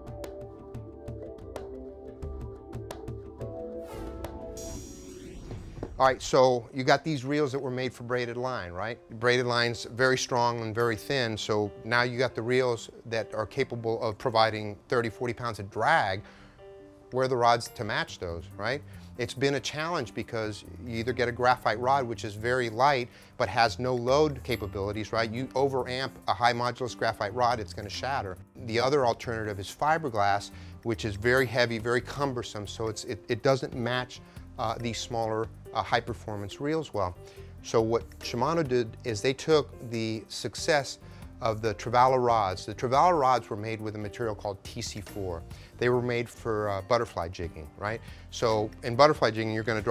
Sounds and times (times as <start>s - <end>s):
Music: 0.0s - 49.9s
Speech: 6.0s - 16.2s, 17.1s - 49.9s.